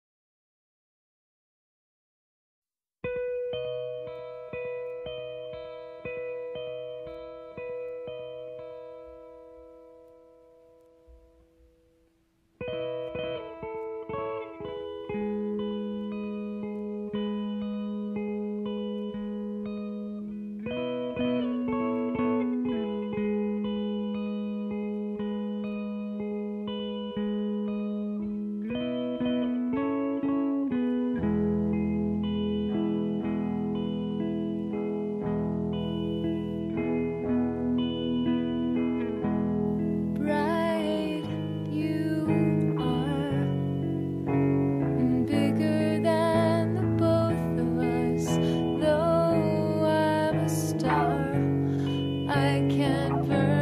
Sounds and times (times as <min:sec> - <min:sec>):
Music: 0:03.0 - 0:53.6.